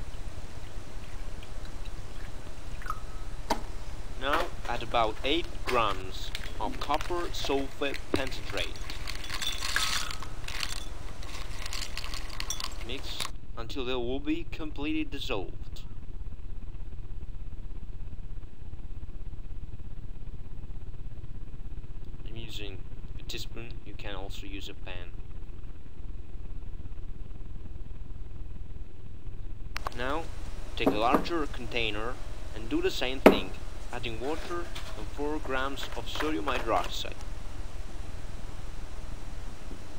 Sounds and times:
Speech: 4.2 - 8.8, 12.8 - 15.9, 22.2 - 25.2, 29.9 - 37.2.

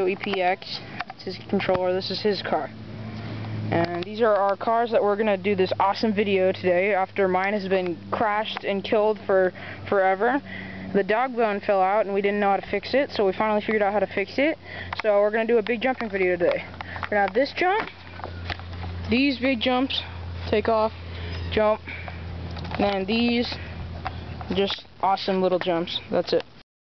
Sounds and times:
Speech: 0.0 - 2.7, 3.7 - 17.9, 19.1 - 21.8, 22.8 - 23.6, 24.5 - 26.5.

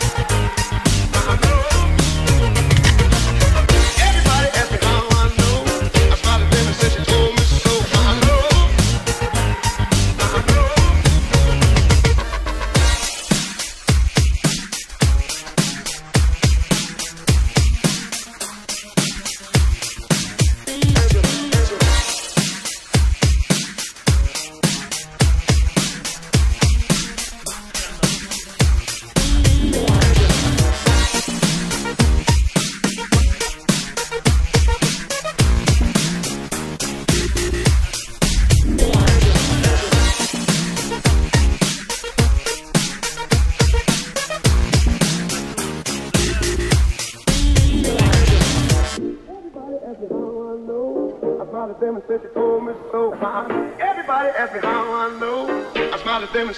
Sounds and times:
Dance music: 0.0 - 56.5.

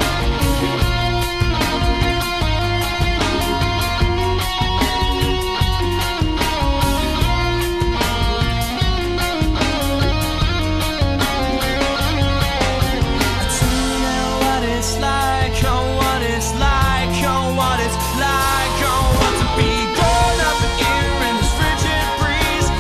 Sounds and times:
Pop music: 0.0 - 22.8
Rock music: 0.0 - 22.8.

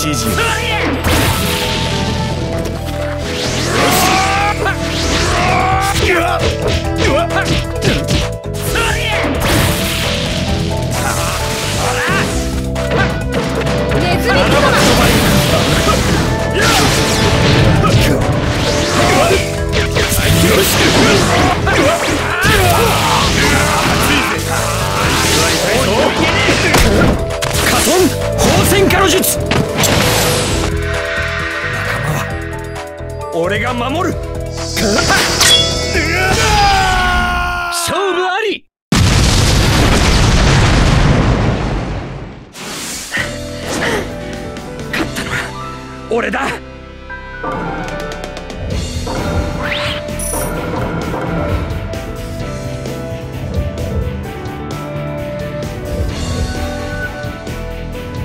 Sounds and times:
Music: 0.0 - 37.7, 42.6 - 58.2
Smash, crash: 9.4 - 28.7, 39.0 - 43.1.

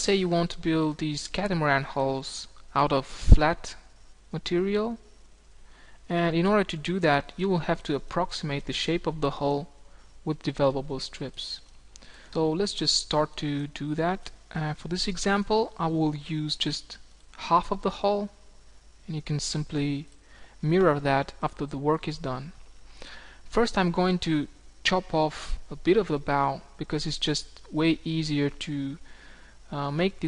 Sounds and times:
Speech: 0.0 - 5.1, 6.1 - 11.7, 12.4 - 18.4, 19.0 - 22.6, 23.5 - 29.0, 29.7 - 30.2.

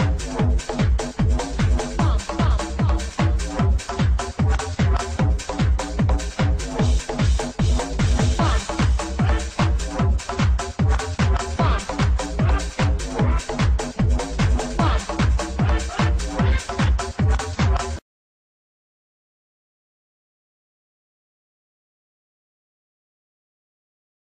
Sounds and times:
Music: 0.0 - 18.0.

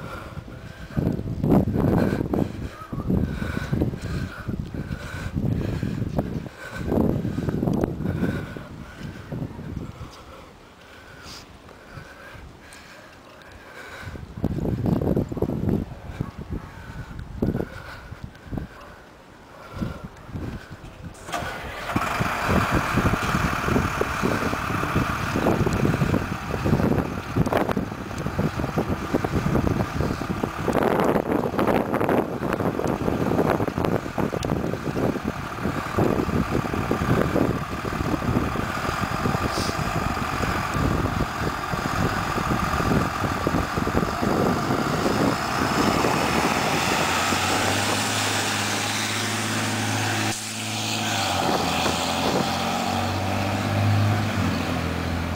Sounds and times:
Truck: 0.0 - 55.3
Engine starting: 21.2 - 23.4.

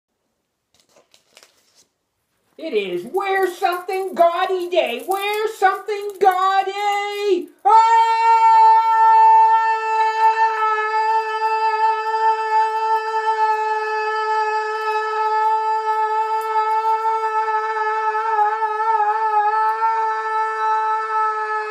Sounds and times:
Inside, small room: 0.1 - 21.7
Speech: 2.6 - 16.4.

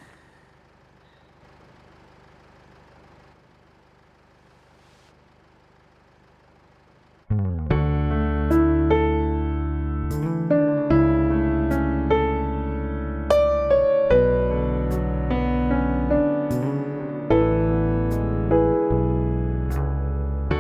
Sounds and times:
Music: 7.4 - 20.6.

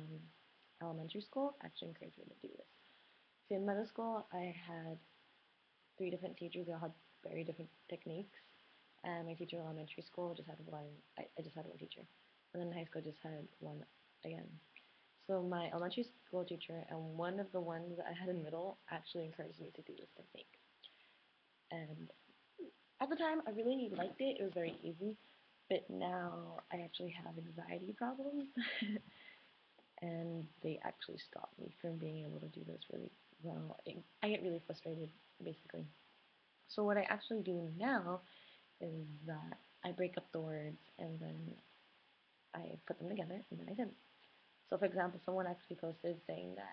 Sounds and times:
Female speech, woman speaking: 0.0 - 2.7, 3.5 - 5.0, 6.0 - 8.4, 9.1 - 14.6, 15.2 - 20.5, 21.7 - 22.2, 23.0 - 29.0, 30.0 - 35.9, 36.7 - 38.2, 38.8 - 41.6, 42.6 - 44.0, 44.7 - 46.7.

